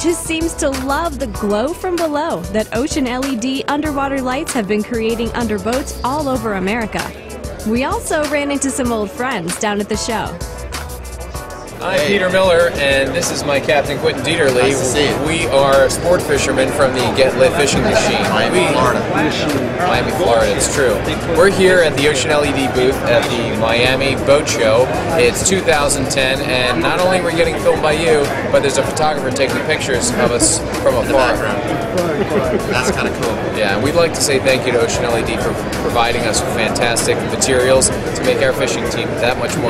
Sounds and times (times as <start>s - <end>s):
Speech: 0.0s - 10.4s, 11.8s - 39.7s
Music: 0.0s - 39.7s.